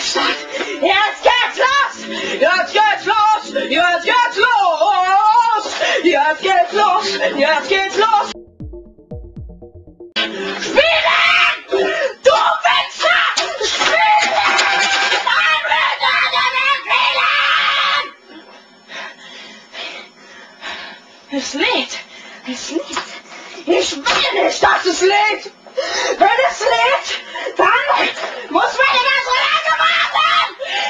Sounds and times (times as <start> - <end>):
Speech: 0.0 - 8.4, 21.3 - 22.9, 23.6 - 25.5, 26.2 - 30.4
Inside, small room: 0.0 - 30.8.